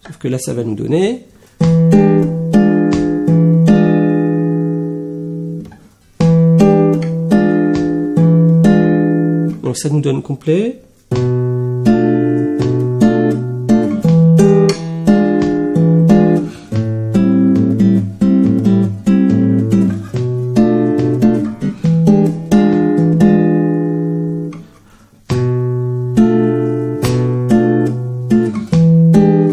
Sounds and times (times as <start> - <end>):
Acoustic guitar: 1.3 - 29.5
Music of Latin America: 11.1 - 29.5.